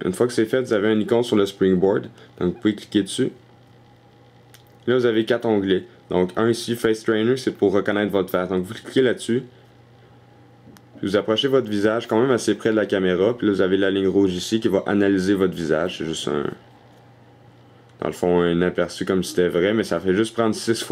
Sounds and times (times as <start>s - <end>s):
Speech: 0.0s - 3.4s, 4.8s - 9.6s, 11.0s - 16.6s, 18.0s - 20.9s.